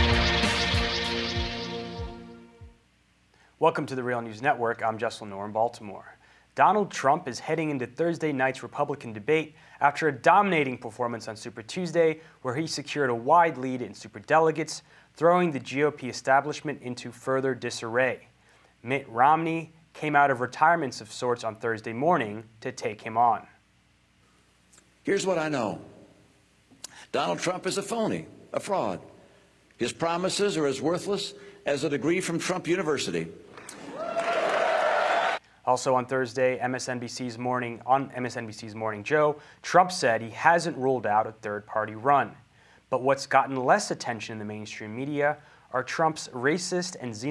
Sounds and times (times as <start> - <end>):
Narration, monologue: 2.6 - 33.9, 35.4 - 47.3
Male speech, man speaking: 3.6 - 23.6, 25.1 - 25.9, 27.1 - 29.1, 29.8 - 33.4, 35.7 - 47.3.